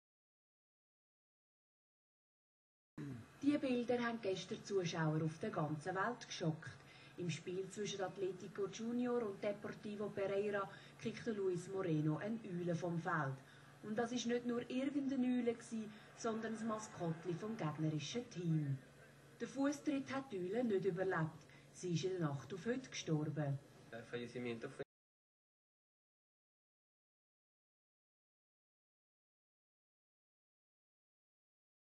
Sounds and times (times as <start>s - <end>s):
Speech: 3.0s - 18.8s, 19.4s - 24.9s.